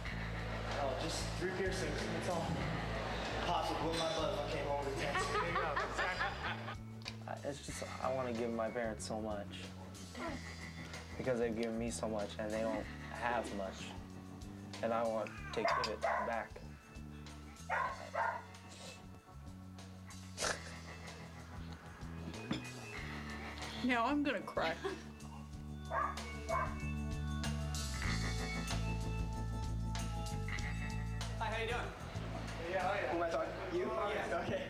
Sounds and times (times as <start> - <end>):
Music: 0.0 - 34.7
Bark: 15.6 - 16.5, 17.7 - 18.6, 25.9 - 26.8.